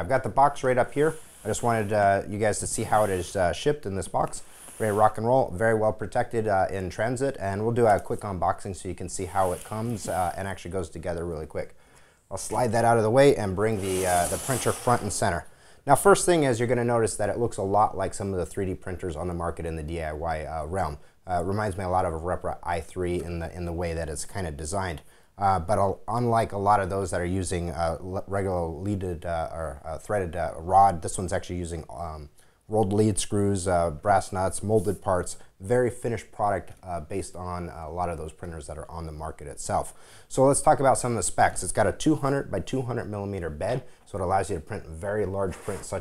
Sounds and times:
Speech: 0.0 - 46.0.

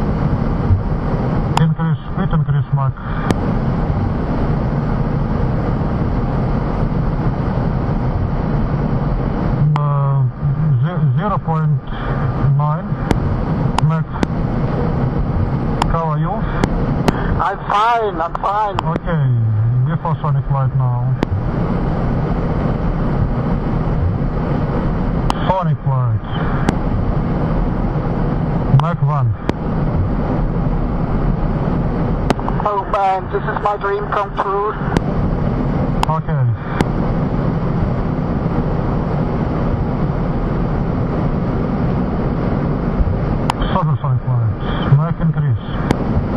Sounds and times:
Speech: 1.6 - 3.0, 9.6 - 13.0, 13.8 - 14.2, 15.9 - 16.6, 17.4 - 21.3, 25.4 - 26.4, 28.7 - 29.4, 32.5 - 35.0, 36.0 - 36.6, 43.6 - 45.8.

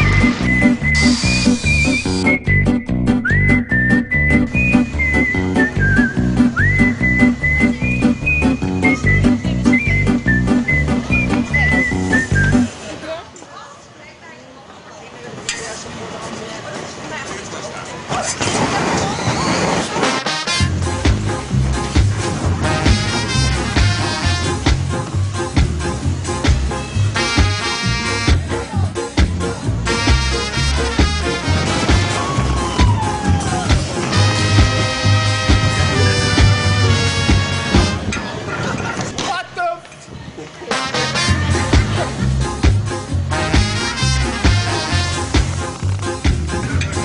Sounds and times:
Music: 0.0 - 12.7, 20.0 - 38.2, 40.7 - 47.0.

